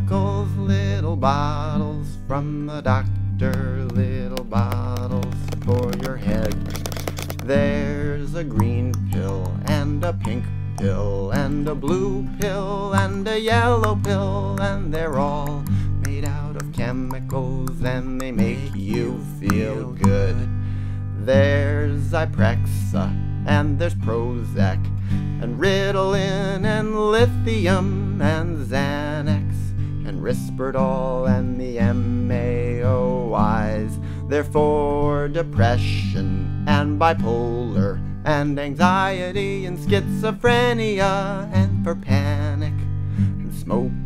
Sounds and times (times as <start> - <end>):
Music: 0.0 - 44.0.